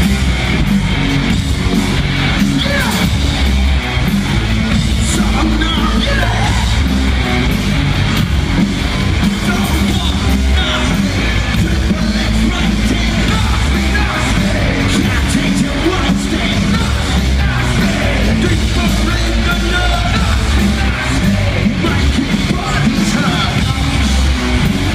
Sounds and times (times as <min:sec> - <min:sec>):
Pop music: 0:04.9 - 0:07.2, 0:09.2 - 0:24.8.